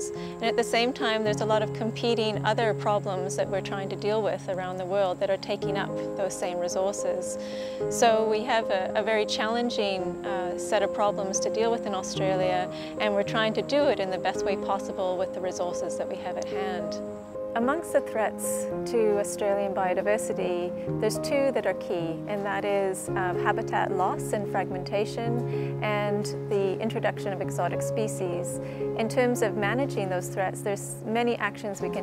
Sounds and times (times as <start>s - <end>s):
Music: 0.0s - 32.0s
Speech: 0.4s - 7.4s, 8.0s - 17.0s, 17.6s - 32.0s.